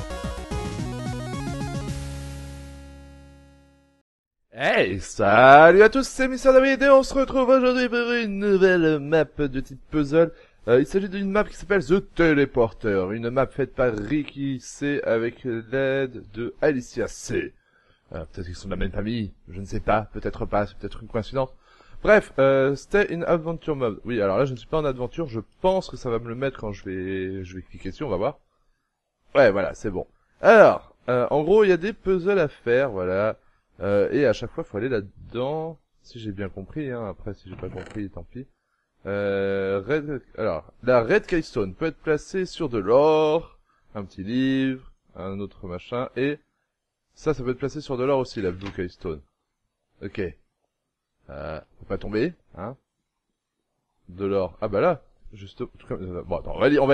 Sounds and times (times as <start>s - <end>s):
Speech: 4.6s - 28.4s, 29.3s - 46.4s, 47.2s - 49.3s, 50.0s - 50.4s, 51.3s - 52.8s, 54.1s - 56.9s.